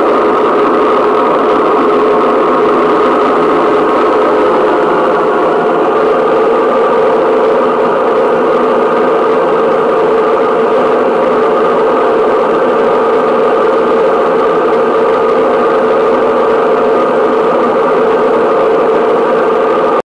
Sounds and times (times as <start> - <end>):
Vibration: 0.0 - 20.0
White noise: 0.0 - 20.0.